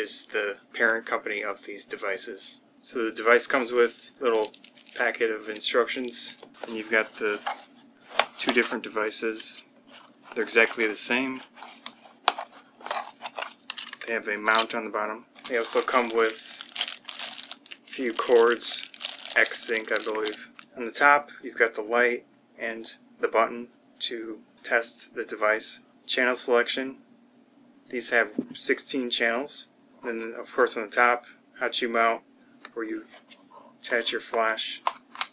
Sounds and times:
Speech: 0:00.0 - 0:07.5, 0:08.4 - 0:09.7, 0:10.4 - 0:11.4, 0:14.0 - 0:16.6, 0:17.9 - 0:27.0, 0:27.9 - 0:33.1, 0:33.8 - 0:34.9.

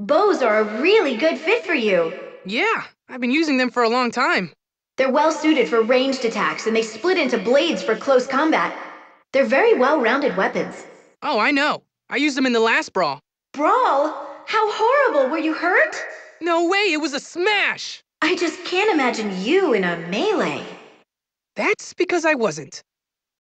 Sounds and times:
Speech: 0:00.0 - 0:08.8, 0:09.4 - 0:20.7, 0:21.6 - 0:22.9.

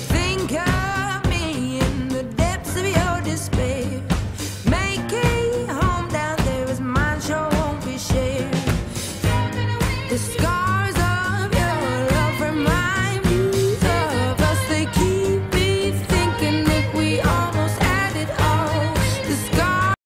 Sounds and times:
Music: 0:00.0 - 0:20.0.

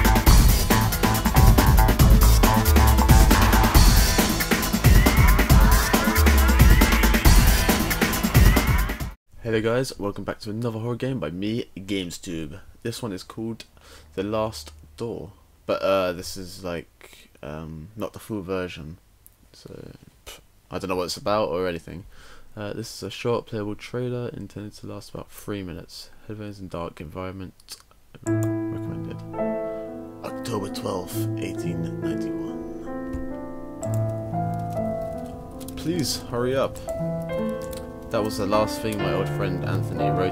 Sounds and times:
Music: 0:00.0 - 0:09.2, 0:28.2 - 0:40.3
Speech: 0:09.4 - 0:13.6, 0:14.2 - 0:19.0, 0:19.6 - 0:27.8, 0:30.2 - 0:32.6, 0:35.8 - 0:36.9, 0:38.1 - 0:40.3.

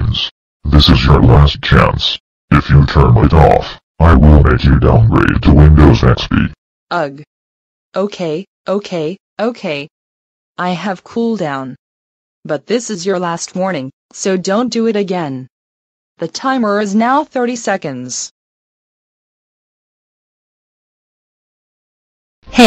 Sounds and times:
Speech: 0:00.0 - 0:07.3, 0:08.0 - 0:09.9, 0:10.6 - 0:11.8, 0:12.5 - 0:15.5, 0:16.2 - 0:18.4.

